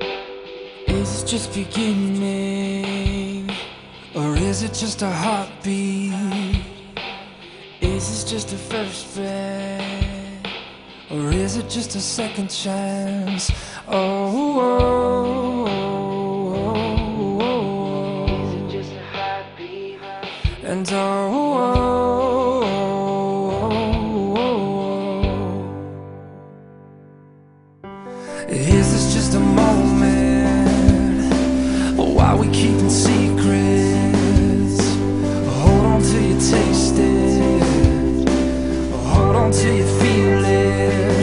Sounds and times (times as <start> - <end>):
Music: 0.0 - 41.2.